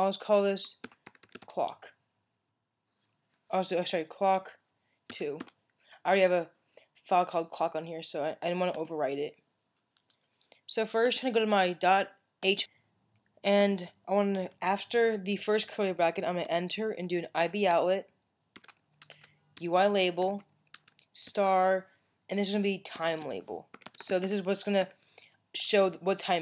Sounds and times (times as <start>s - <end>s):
Speech: 0.0s - 0.8s, 1.5s - 2.0s, 3.5s - 5.5s, 6.1s - 9.4s, 10.7s - 12.7s, 13.5s - 18.1s, 19.6s - 20.4s, 21.2s - 25.0s, 25.6s - 26.4s.